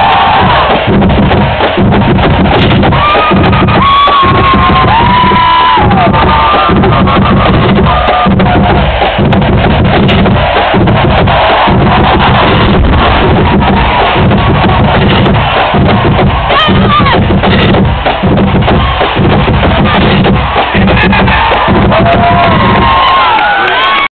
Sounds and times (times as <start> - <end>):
Music: 0.0 - 24.1.